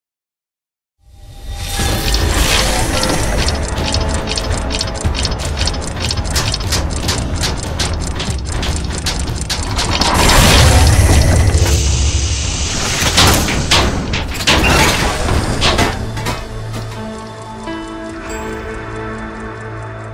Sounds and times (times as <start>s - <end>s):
Gears: 1.6s - 20.1s.